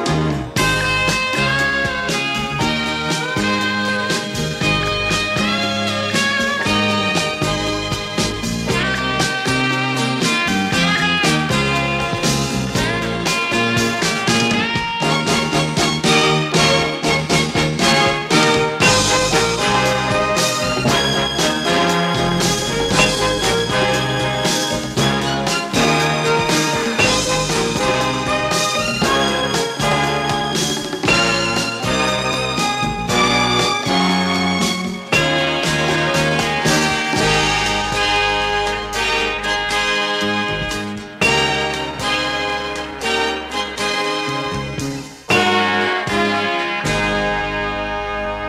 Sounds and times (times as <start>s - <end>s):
Music: 0.0s - 48.4s.